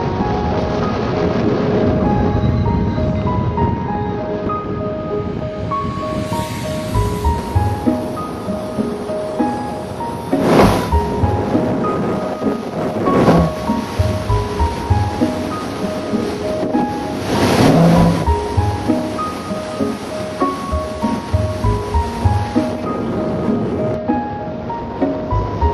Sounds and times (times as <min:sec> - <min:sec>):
Music: 0:00.0 - 0:25.7.